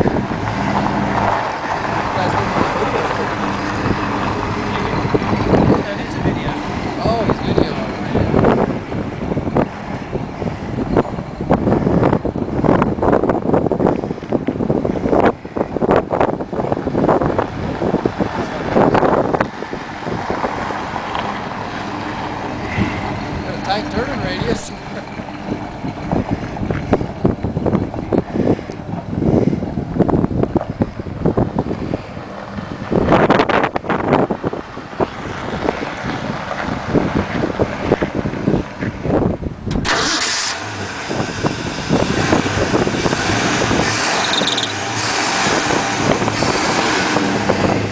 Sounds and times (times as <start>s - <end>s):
Truck: 0.0s - 47.9s
Speech: 2.1s - 3.2s, 5.8s - 8.3s, 23.5s - 24.8s.